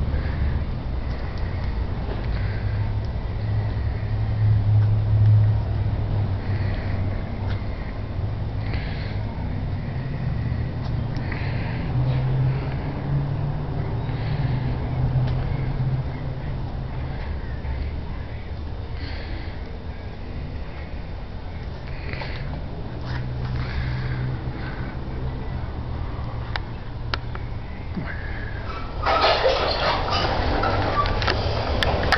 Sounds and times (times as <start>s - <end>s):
Heavy engine (low frequency): 0.0s - 32.1s.